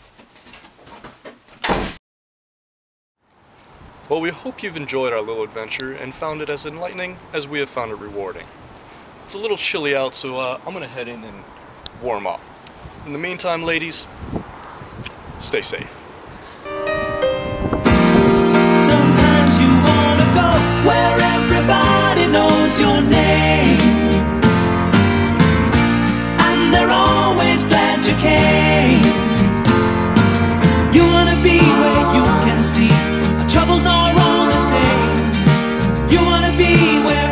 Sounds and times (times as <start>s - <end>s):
Outside, urban or manmade: 3.2s - 27.1s
Speech: 4.1s - 8.5s, 9.3s - 12.4s, 13.0s - 14.1s, 15.4s - 16.0s.